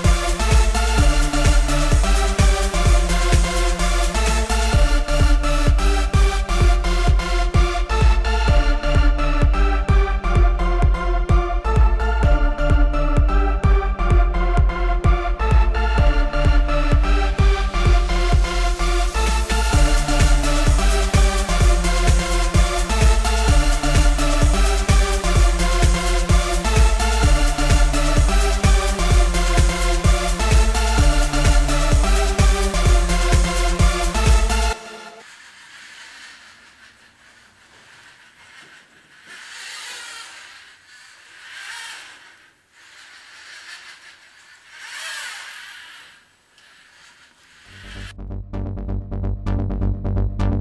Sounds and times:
Music: 0.0s - 35.2s, 47.7s - 50.6s
Inside, small room: 0.0s - 50.6s.

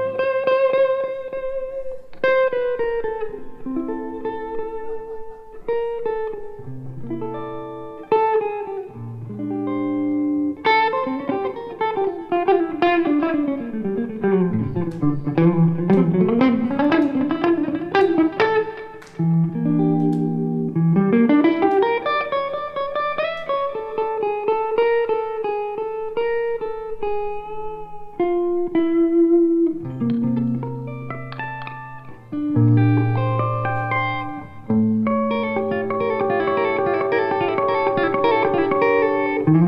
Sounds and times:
Jazz: 0.0s - 39.6s.

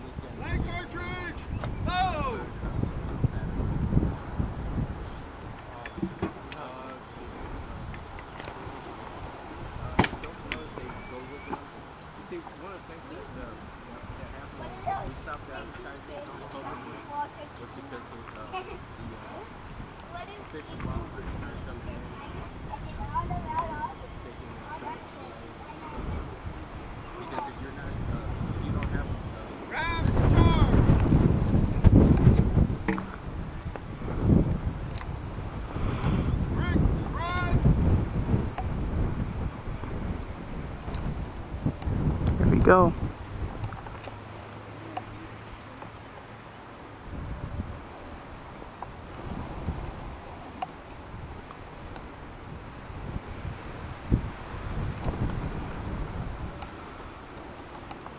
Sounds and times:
Outside, rural or natural: 0.0s - 58.1s.

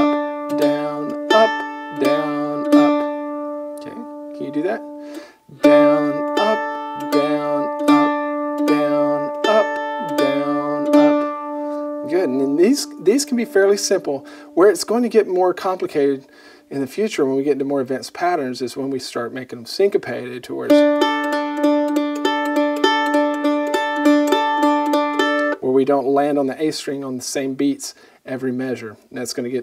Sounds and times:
Mandolin: 0.0s - 16.2s, 20.2s - 26.0s
Speech: 3.8s - 4.8s, 12.1s - 20.8s, 25.6s - 29.6s.

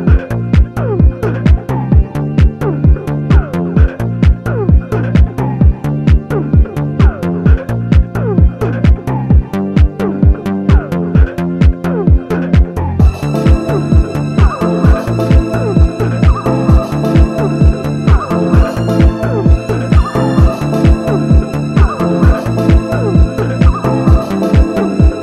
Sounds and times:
Music: 0.0s - 25.2s.

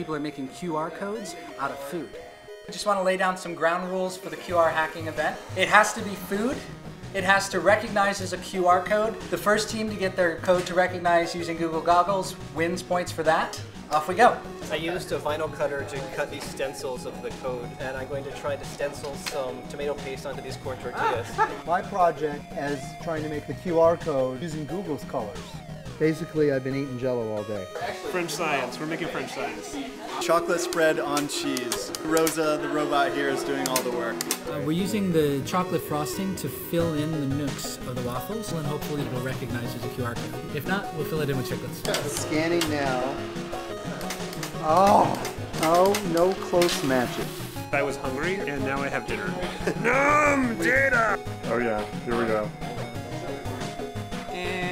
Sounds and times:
Music: 0.0s - 54.7s.

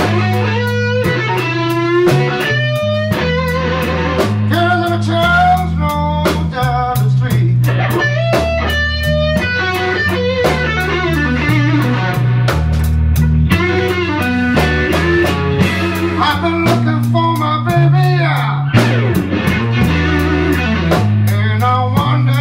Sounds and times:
Blues: 0.0s - 22.4s
Rhythm and blues: 0.0s - 22.4s.

